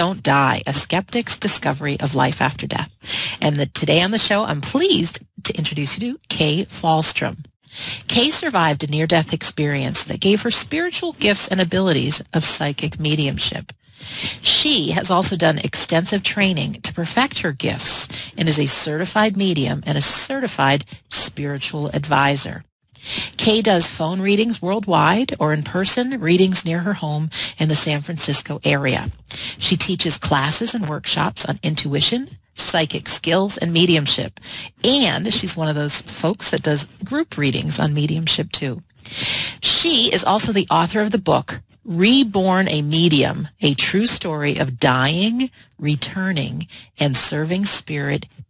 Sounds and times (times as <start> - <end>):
Speech: 0.0 - 48.4.